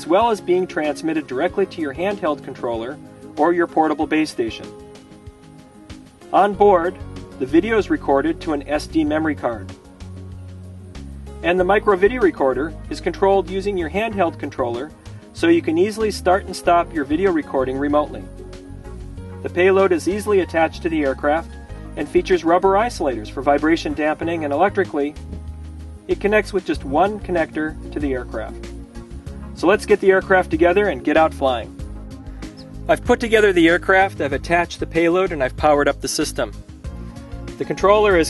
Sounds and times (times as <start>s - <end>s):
Speech: 0.0s - 4.7s, 6.3s - 9.7s, 11.4s - 18.3s, 19.5s - 25.2s, 26.1s - 28.6s, 29.6s - 31.7s, 32.9s - 36.5s, 37.6s - 38.2s
Music: 0.0s - 38.2s.